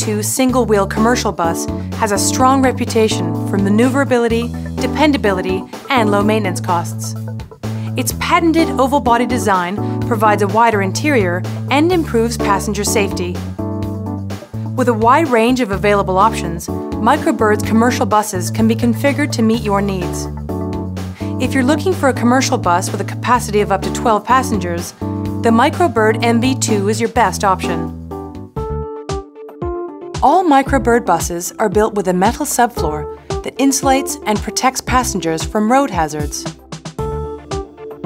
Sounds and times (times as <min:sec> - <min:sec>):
Speech: 0:00.0 - 0:07.2, 0:08.0 - 0:13.4, 0:14.8 - 0:20.3, 0:21.4 - 0:27.9, 0:30.2 - 0:36.5
Music: 0:00.0 - 0:38.0.